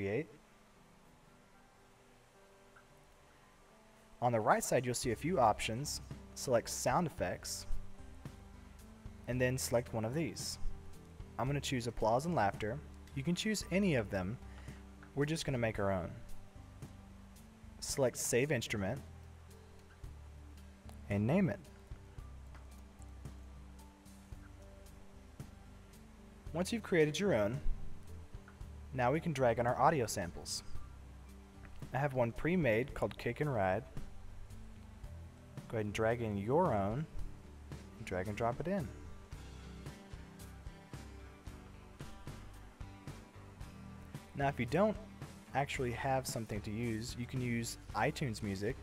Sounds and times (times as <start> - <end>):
Speech: 0.0 - 0.4, 4.2 - 7.7, 9.3 - 10.6, 11.4 - 14.4, 15.2 - 16.2, 17.8 - 19.0, 21.0 - 21.7, 26.5 - 27.7, 28.9 - 30.7, 31.9 - 33.9, 35.7 - 37.2, 38.0 - 39.0, 44.4 - 48.8.